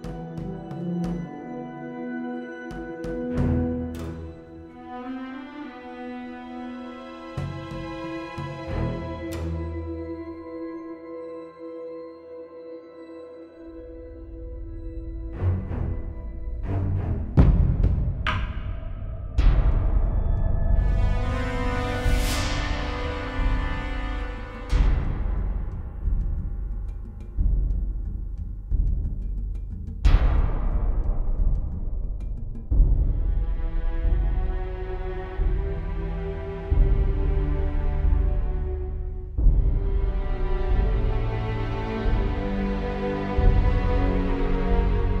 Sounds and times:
Music: 0.0s - 45.2s.

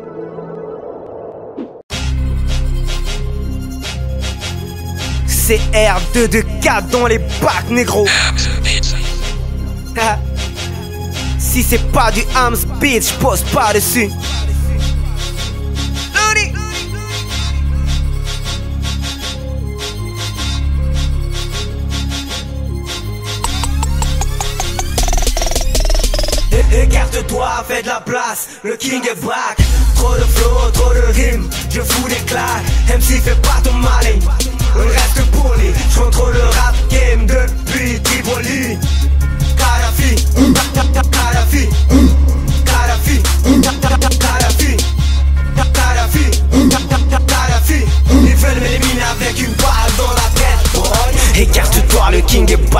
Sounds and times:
Independent music: 1.9s - 28.4s, 29.6s - 52.7s.

